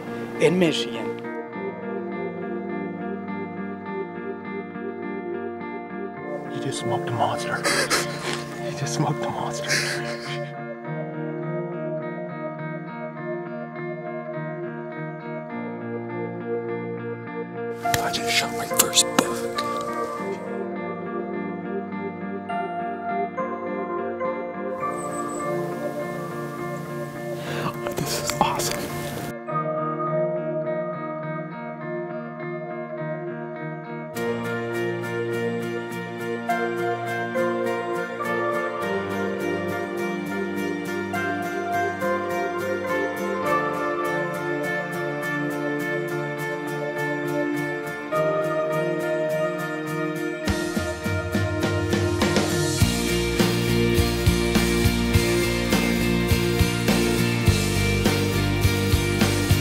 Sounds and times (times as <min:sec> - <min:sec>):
Music: 0:00.0 - 0:59.6
Speech: 0:00.4 - 0:01.2, 0:06.5 - 0:07.9, 0:08.5 - 0:10.4, 0:18.0 - 0:19.8, 0:27.6 - 0:29.0.